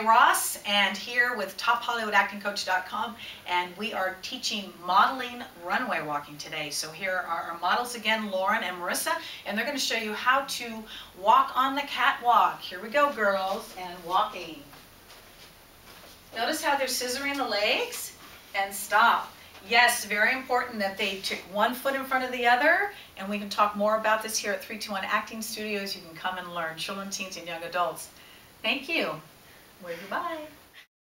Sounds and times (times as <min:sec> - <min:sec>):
Speech: 0:00.0 - 0:14.8, 0:16.4 - 0:28.1, 0:28.7 - 0:30.6.